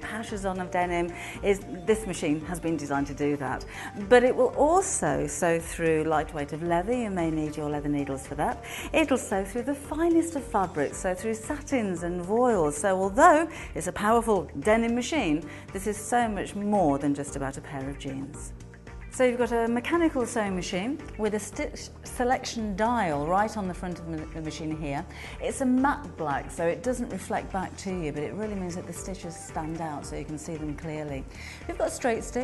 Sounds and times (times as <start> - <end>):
Speech: 0.0 - 18.5, 19.2 - 32.4
Music: 0.0 - 32.4.